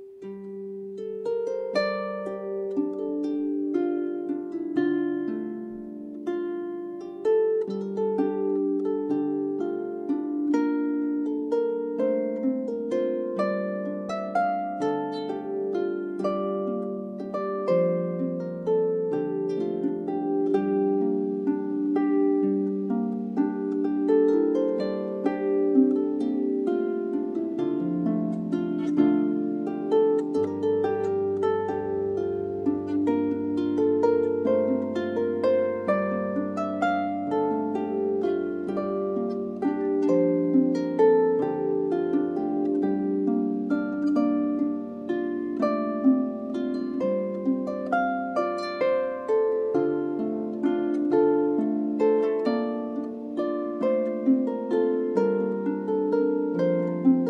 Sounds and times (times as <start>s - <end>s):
Harp: 0.0s - 57.2s.